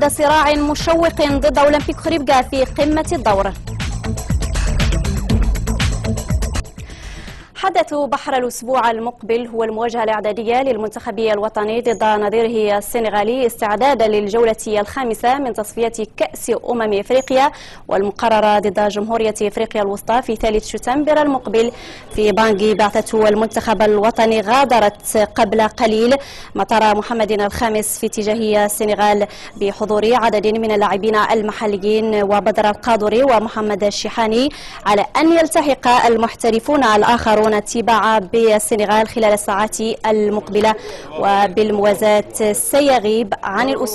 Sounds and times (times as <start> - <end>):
Speech: 0.0 - 3.6, 7.6 - 43.9
Music: 0.0 - 7.6.